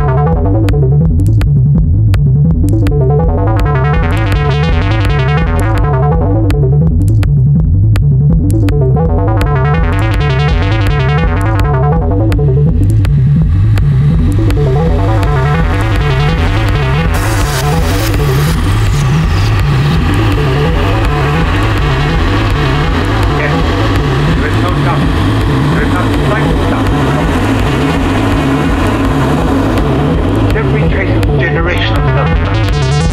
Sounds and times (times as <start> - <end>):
Music: 0.0 - 33.1.